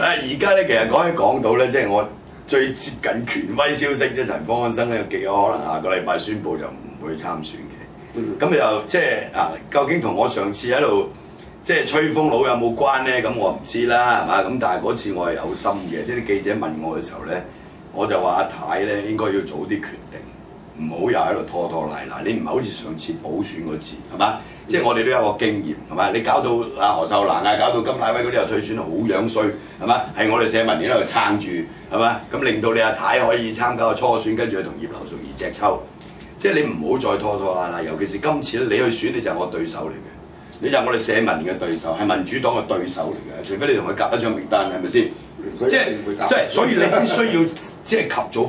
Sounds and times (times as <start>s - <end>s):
Speech: 0.0s - 48.4s.